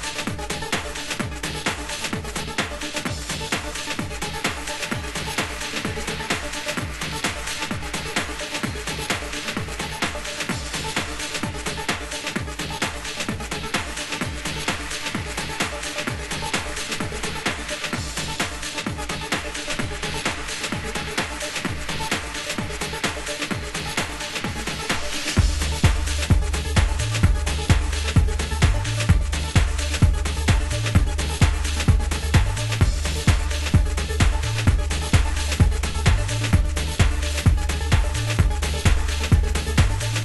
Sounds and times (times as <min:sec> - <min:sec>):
Music: 0:00.0 - 0:40.2.